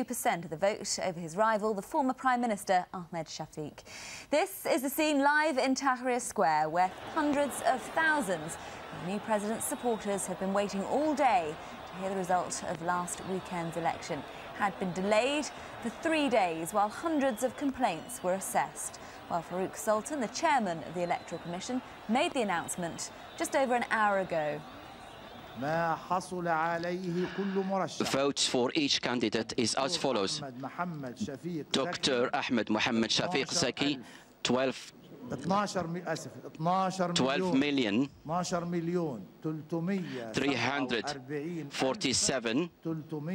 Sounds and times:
Speech: 25.6 - 43.3.

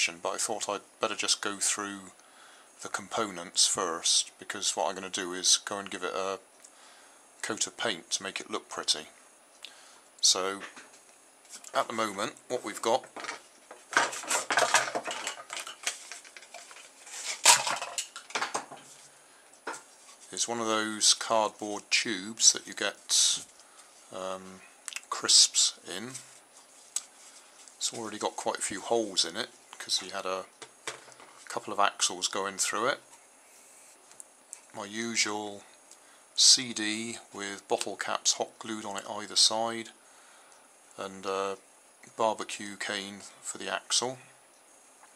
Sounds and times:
Speech: 0.0 - 2.2, 2.8 - 6.4, 7.4 - 9.2, 10.2 - 10.8, 11.7 - 13.1, 20.3 - 23.5, 24.1 - 26.3, 27.8 - 30.5, 31.5 - 33.1, 34.7 - 35.7, 36.4 - 40.0, 41.0 - 44.3.

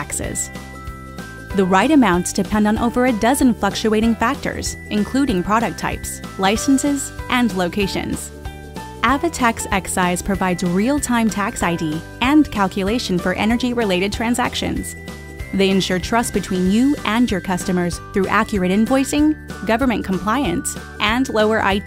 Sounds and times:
Speech: 0.0 - 0.5, 1.6 - 8.3, 9.0 - 21.8
Music: 0.0 - 21.8.

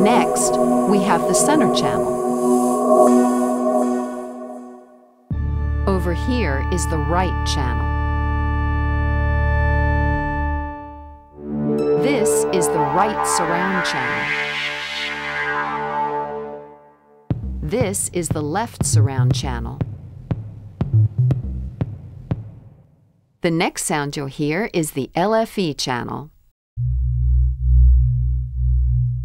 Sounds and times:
Speech: 0.0 - 2.1, 5.9 - 7.9, 11.9 - 14.3, 17.6 - 19.8, 23.4 - 26.3
Soundtrack music: 0.0 - 5.7, 11.3 - 17.6.

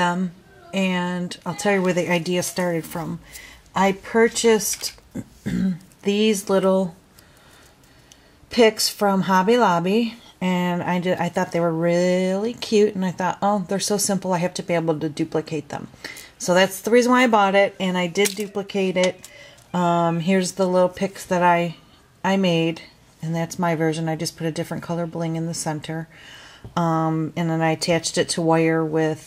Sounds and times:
Speech: 0.0 - 3.2, 8.5 - 26.1, 26.8 - 29.2.

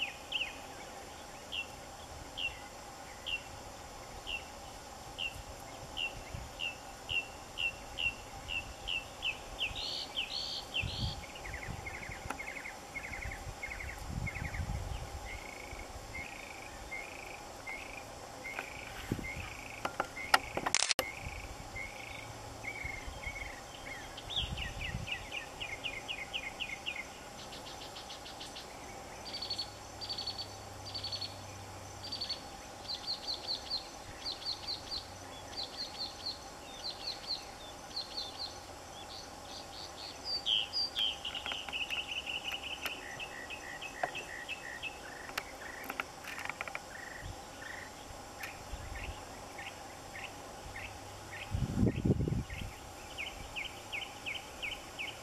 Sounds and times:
Chirp, tweet: 0.0 - 3.5, 5.2 - 55.2
Outside, rural or natural: 0.0 - 55.2.

